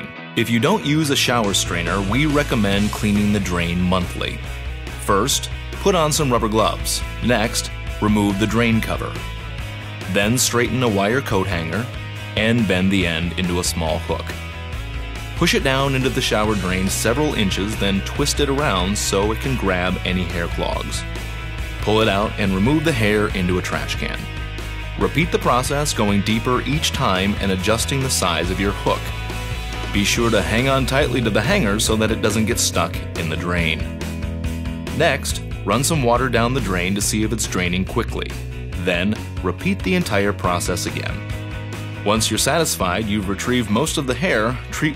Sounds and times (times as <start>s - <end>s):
Speech: 0.0s - 9.3s, 10.1s - 14.4s, 15.4s - 21.0s, 21.8s - 24.3s, 25.0s - 29.2s, 29.9s - 33.9s, 35.0s - 41.2s, 42.0s - 44.9s
Music: 0.0s - 44.9s.